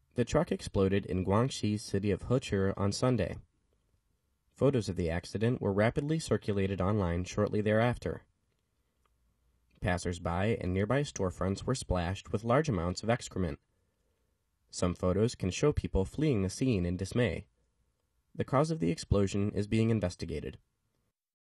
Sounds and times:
Speech: 0.2s - 3.4s, 4.6s - 8.3s, 9.8s - 13.6s, 14.7s - 17.5s, 18.4s - 20.6s.

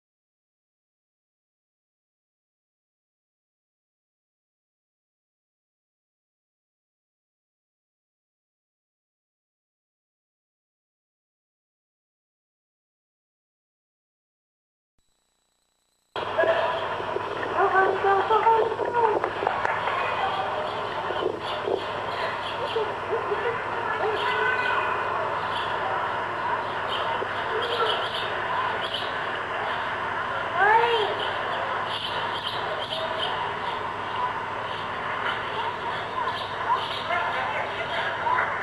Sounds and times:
Speech: 16.4s - 31.9s, 35.1s - 38.6s.

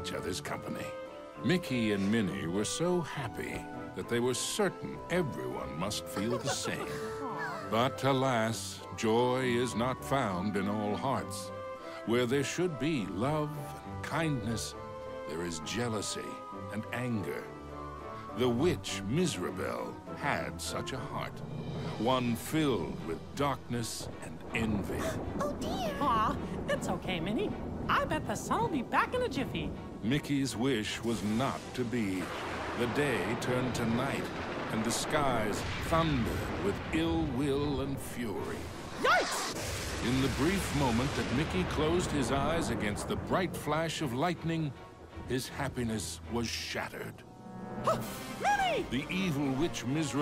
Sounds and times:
Music: 0.0s - 50.2s.

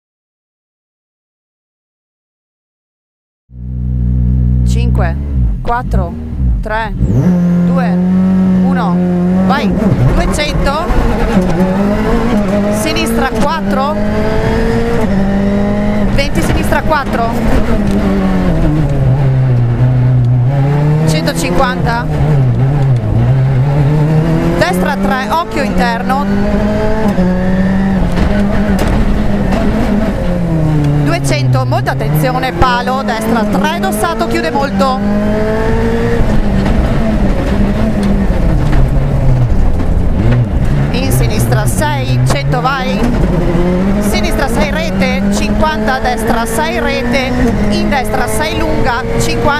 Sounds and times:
Car: 3.5s - 49.5s
Speech: 4.6s - 7.0s, 7.7s - 8.0s, 8.6s - 10.9s, 12.8s - 14.0s, 16.2s - 17.4s, 21.1s - 22.1s, 24.6s - 26.3s, 31.1s - 35.0s, 40.9s - 43.1s, 44.0s - 49.5s.

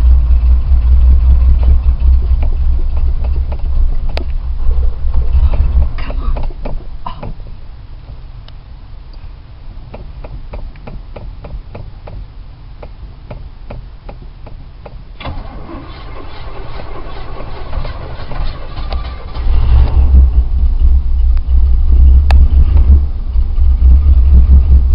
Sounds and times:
Car: 0.0s - 24.9s.

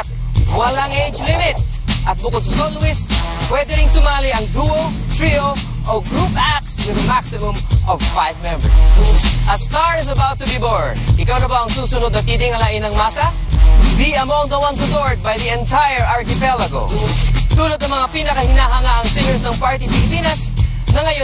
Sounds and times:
Speech: 0.0s - 8.8s, 9.5s - 13.4s
Music: 0.0s - 21.2s.

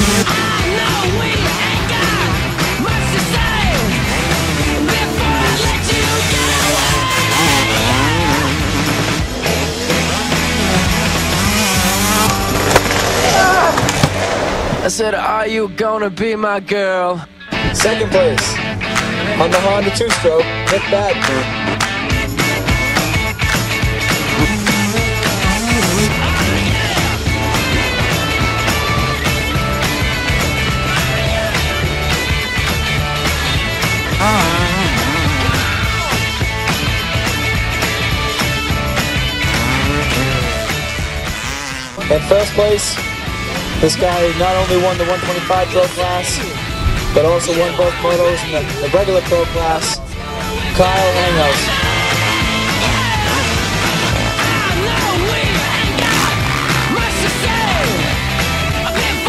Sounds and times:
Motorcycle: 0.0s - 14.8s, 18.4s - 47.3s, 49.6s - 59.2s
Music: 0.0s - 59.2s
Speech: 14.8s - 18.6s, 19.2s - 21.5s, 42.0s - 43.1s, 43.8s - 46.6s, 47.2s - 51.8s.

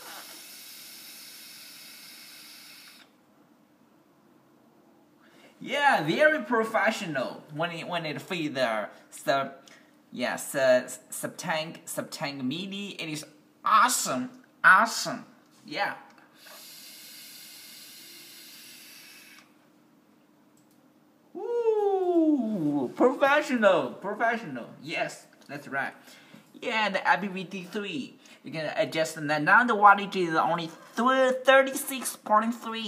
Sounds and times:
Inside, small room: 0.0s - 32.8s
Speech: 5.6s - 9.6s, 10.2s - 16.1s, 21.4s - 26.0s, 26.6s - 32.8s.

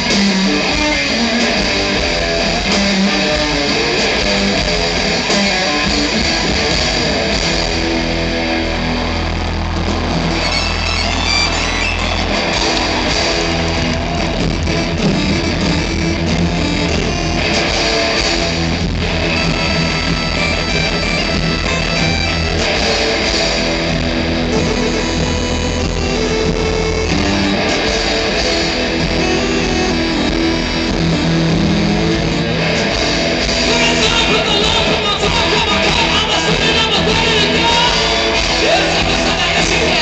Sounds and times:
Music: 0.0s - 40.0s.

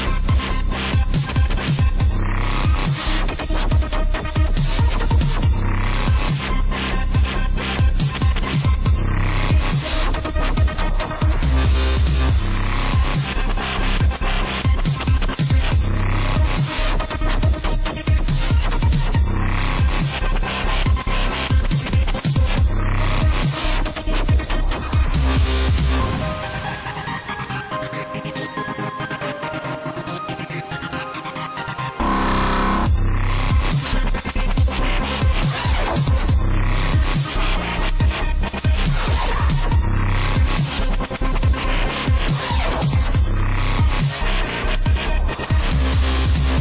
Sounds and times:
Dubstep: 0.0s - 46.6s.

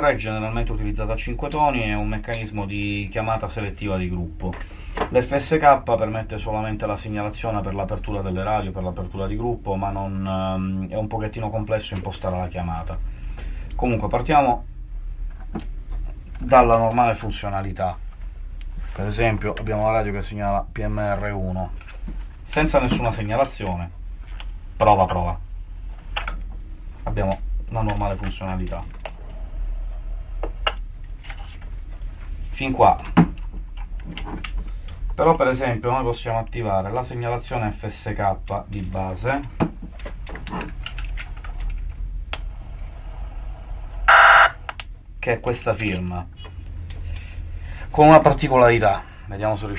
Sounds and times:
Speech: 0.0s - 13.0s, 13.8s - 14.7s, 16.4s - 18.0s, 19.0s - 21.8s, 22.5s - 24.0s, 24.8s - 25.4s, 27.1s - 29.0s, 32.5s - 33.2s, 35.2s - 39.6s, 45.2s - 46.5s, 47.9s - 49.7s.

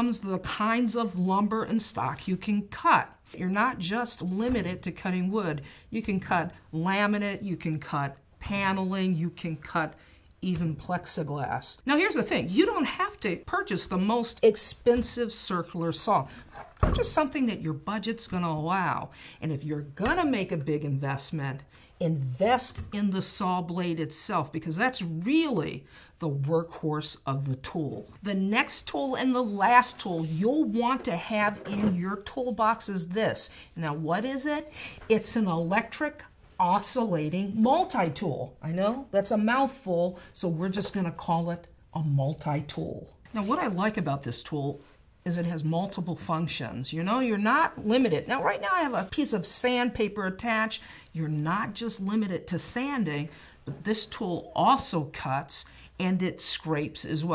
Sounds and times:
Speech: 0.0s - 57.3s.

